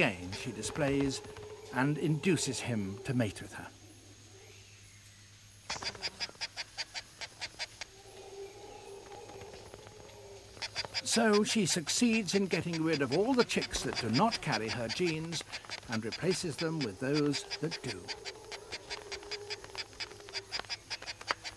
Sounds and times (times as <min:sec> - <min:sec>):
Bird: 0:00.0 - 0:03.7, 0:04.3 - 0:21.5
Outside, rural or natural: 0:00.0 - 0:21.5
Speech: 0:11.1 - 0:18.1.